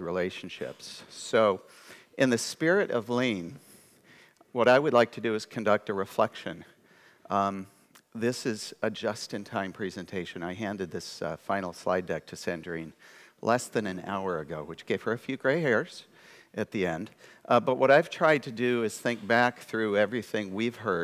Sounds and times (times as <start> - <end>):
Speech: 0.0 - 3.6, 4.5 - 6.7, 7.3 - 21.0.